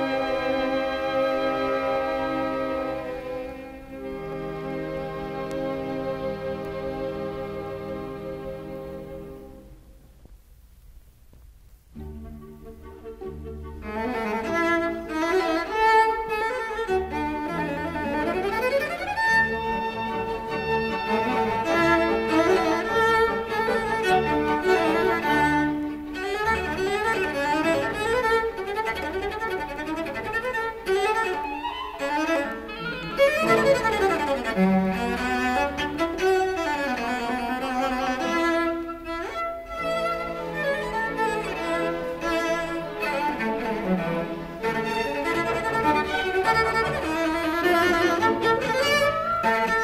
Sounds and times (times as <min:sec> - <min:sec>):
Violin, fiddle: 0:00.0 - 0:09.7, 0:12.0 - 0:49.8.